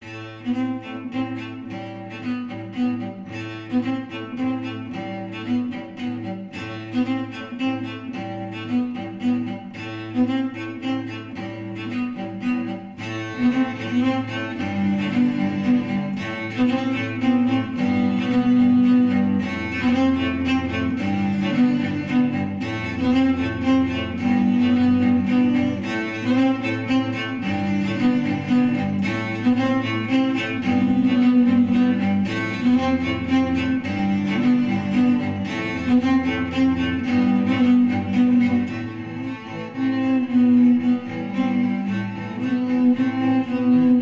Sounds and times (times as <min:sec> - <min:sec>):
Cello: 0:00.0 - 0:44.0
String section: 0:00.0 - 0:44.0.